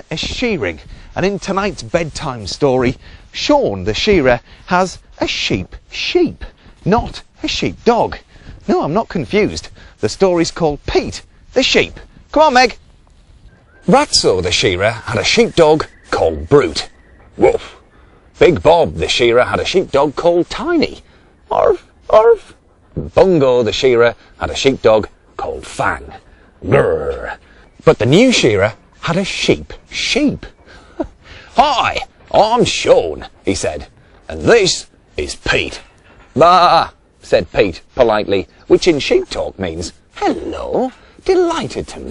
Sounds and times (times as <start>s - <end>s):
Speech: 0.0s - 12.8s, 13.8s - 17.8s, 18.4s - 42.1s.